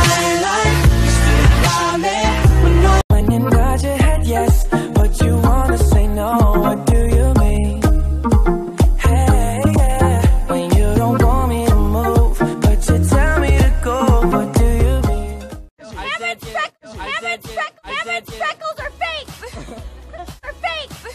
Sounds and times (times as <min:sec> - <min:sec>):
Music: 0:00.0 - 0:21.1
Speech: 0:15.8 - 0:19.4, 0:20.4 - 0:21.1.